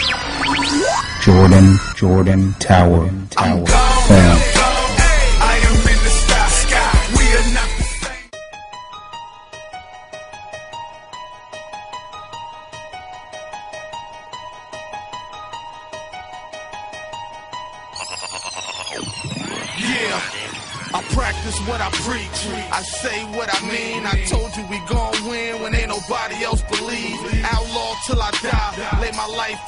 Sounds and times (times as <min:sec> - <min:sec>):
Dance music: 0:00.0 - 0:08.3, 0:18.6 - 0:29.6.